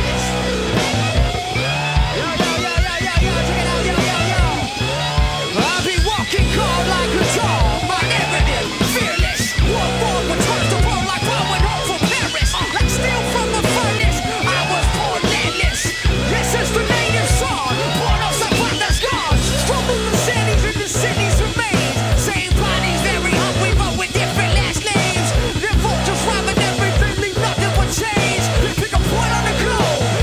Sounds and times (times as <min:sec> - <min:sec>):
Funk: 0:00.0 - 0:30.2
Rhythm and blues: 0:00.0 - 0:30.2.